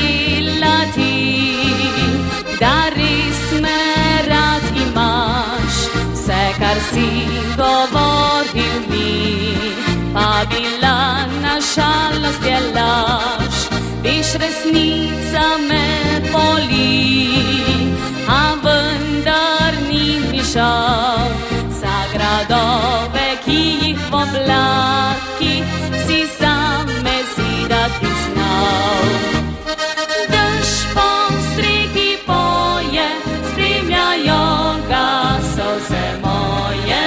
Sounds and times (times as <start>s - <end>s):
Music: 0.0s - 37.0s.